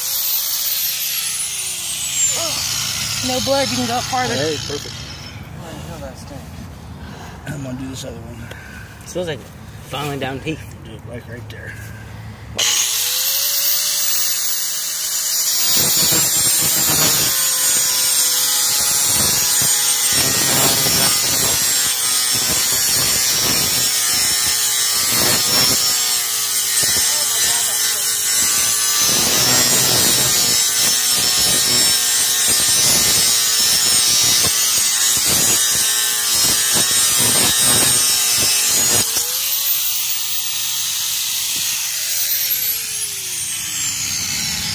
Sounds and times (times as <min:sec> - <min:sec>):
Speech: 0:09.1 - 0:11.8, 0:27.0 - 0:28.1.